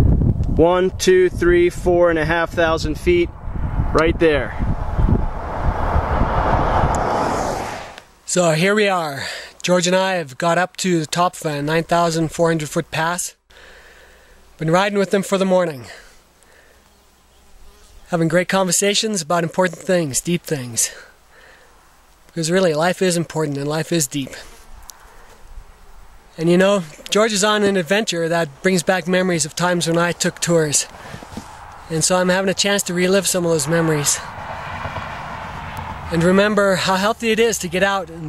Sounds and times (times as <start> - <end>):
Speech: 0.6 - 3.3, 3.9 - 4.6, 8.3 - 13.4, 14.6 - 16.0, 17.9 - 21.1, 22.4 - 24.5, 26.4 - 30.9, 31.9 - 34.3, 36.1 - 38.2.